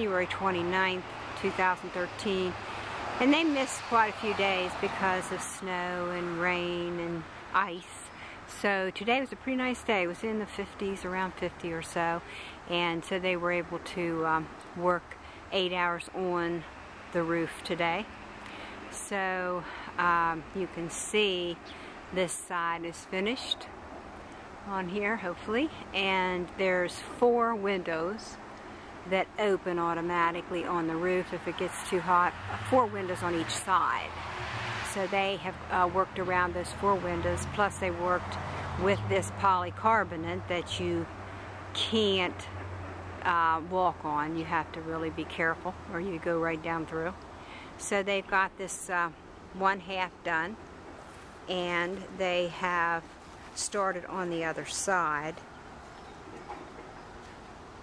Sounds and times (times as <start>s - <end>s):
Speech: 0.0s - 2.6s, 3.2s - 18.1s, 18.9s - 23.7s, 24.7s - 28.4s, 29.1s - 34.1s, 34.9s - 41.1s, 41.8s - 42.5s, 43.2s - 47.2s, 47.8s - 50.6s, 51.5s - 53.0s, 53.6s - 55.4s.